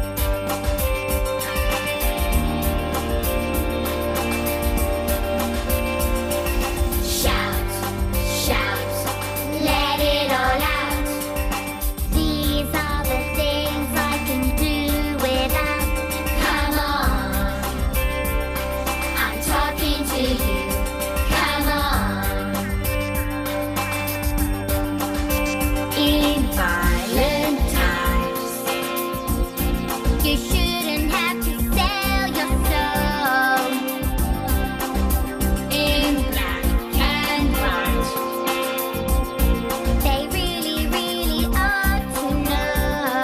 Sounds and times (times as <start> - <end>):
Music: 0.0 - 43.2.